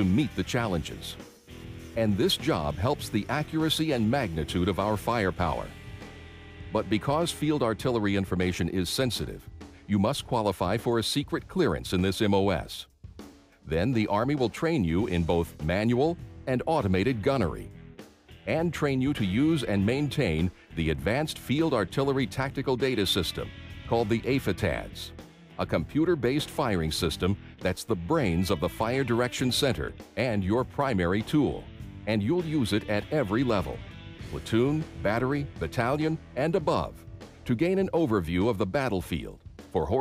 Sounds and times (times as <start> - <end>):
Speech: 0.0 - 1.2, 2.0 - 5.8, 6.7 - 12.9, 13.7 - 17.7, 18.5 - 40.0
Music: 0.0 - 40.0.